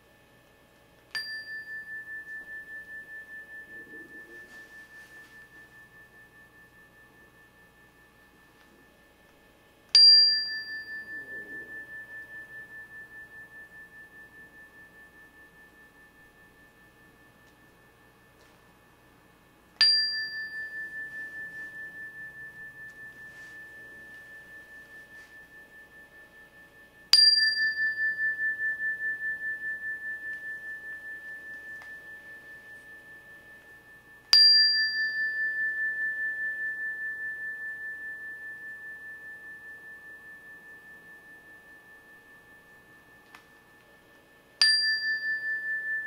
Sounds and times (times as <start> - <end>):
Tuning fork: 0.0 - 46.0
Chime: 1.0 - 46.0.